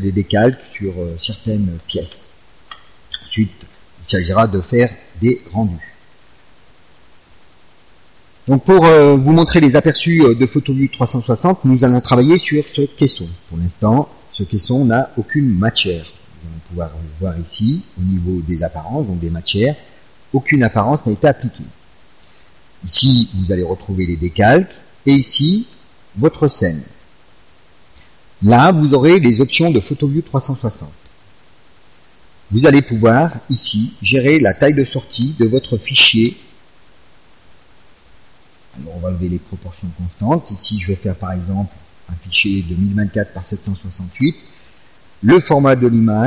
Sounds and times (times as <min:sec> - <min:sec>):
Speech: 0:00.0 - 0:02.3, 0:03.1 - 0:06.0, 0:08.5 - 0:21.8, 0:22.8 - 0:27.0, 0:28.4 - 0:31.0, 0:32.5 - 0:36.5, 0:38.8 - 0:44.6, 0:45.2 - 0:46.2.